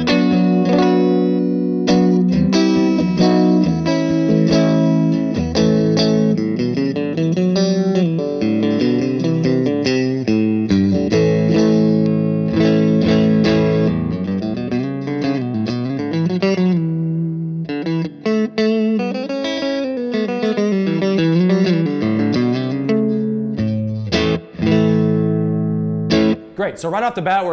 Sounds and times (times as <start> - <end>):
Effects unit: 0.0 - 26.6
Electric guitar: 0.0 - 26.6.